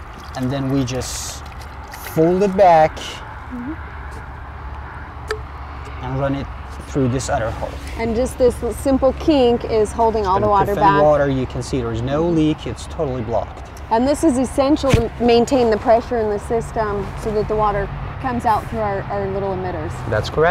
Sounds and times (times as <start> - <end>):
Speech: 10.1 - 11.3.